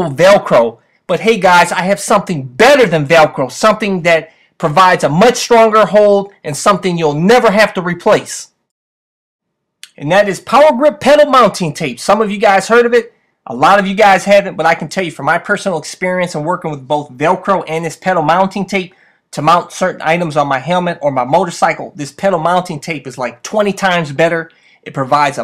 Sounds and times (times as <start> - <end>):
Speech: 0.0 - 8.6, 9.8 - 25.4.